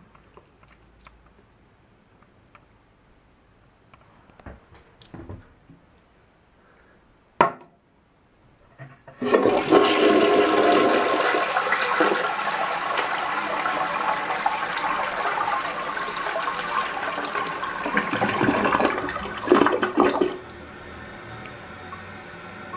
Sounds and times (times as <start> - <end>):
Toilet flush: 9.1 - 21.4.